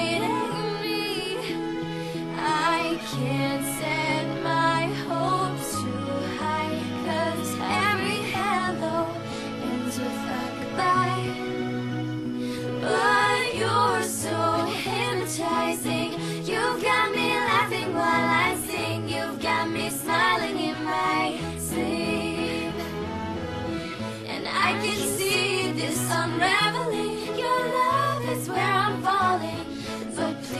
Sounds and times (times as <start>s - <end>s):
Female singing: 0.0s - 1.6s, 2.4s - 11.4s, 12.8s - 22.8s, 24.3s - 30.5s
Music: 0.0s - 30.5s.